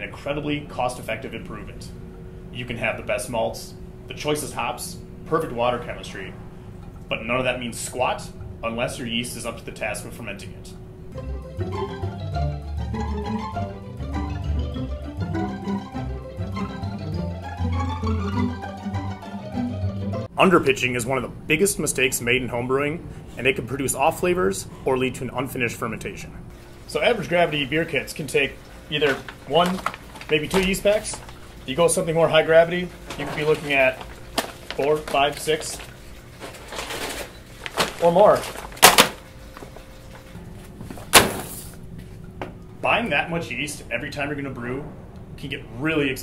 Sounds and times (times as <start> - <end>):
Speech: 0.0 - 6.4, 7.1 - 10.8, 20.4 - 34.0, 34.8 - 35.8, 37.9 - 38.6, 42.8 - 46.2.